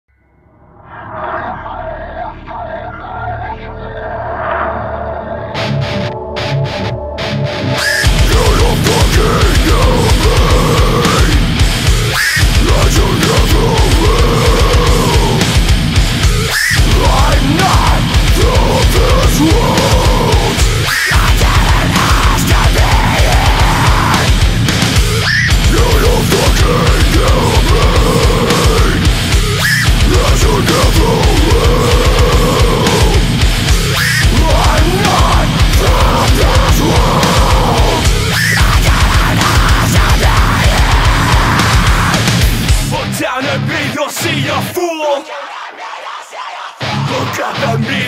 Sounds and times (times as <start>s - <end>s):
Angry music: 0.1s - 48.0s.